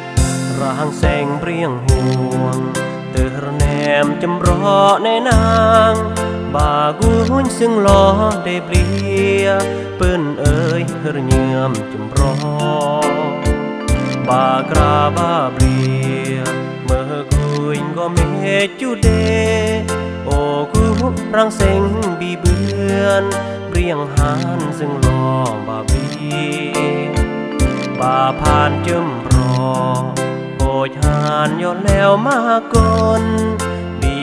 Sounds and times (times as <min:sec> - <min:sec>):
Music: 0:00.0 - 0:34.2.